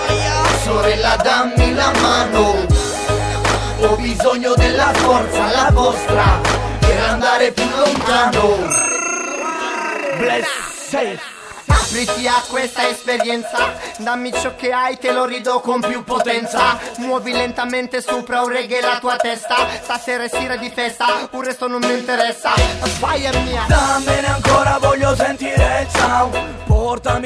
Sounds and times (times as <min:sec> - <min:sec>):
Music: 0:00.0 - 0:08.8, 0:10.8 - 0:27.2
Sound effect: 0:08.0 - 0:11.8.